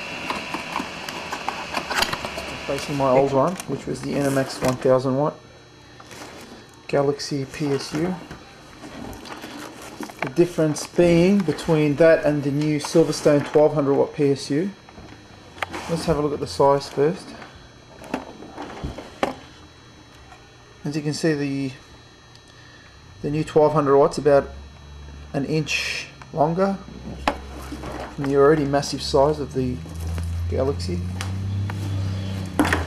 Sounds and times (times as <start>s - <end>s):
Speech: 2.7s - 5.4s, 6.9s - 8.3s, 10.2s - 14.8s, 15.8s - 17.4s, 20.8s - 21.8s, 23.2s - 24.6s, 25.3s - 26.9s, 28.2s - 29.9s, 30.5s - 31.1s.